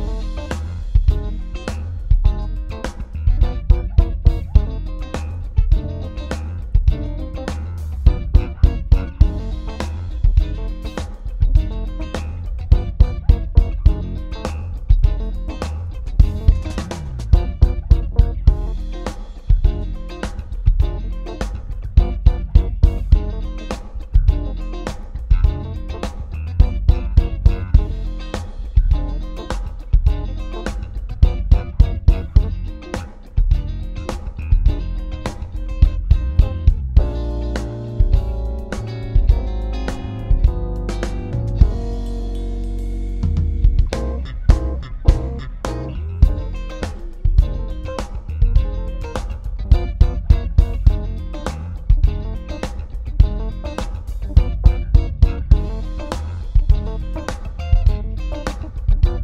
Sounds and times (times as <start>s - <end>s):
Music: 0.0s - 59.2s.